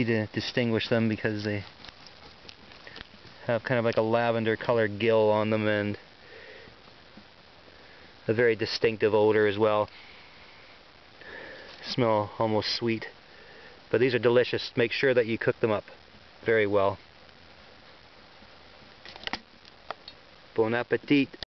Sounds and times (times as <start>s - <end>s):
Speech: 0.0s - 1.7s, 3.4s - 6.0s, 8.3s - 9.9s, 11.8s - 13.2s, 13.9s - 17.0s, 20.6s - 21.4s.